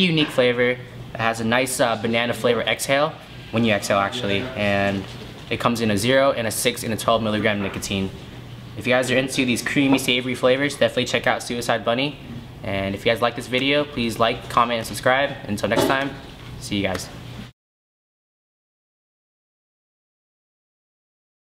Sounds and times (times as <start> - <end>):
Speech: 0.0 - 8.2, 8.8 - 17.2.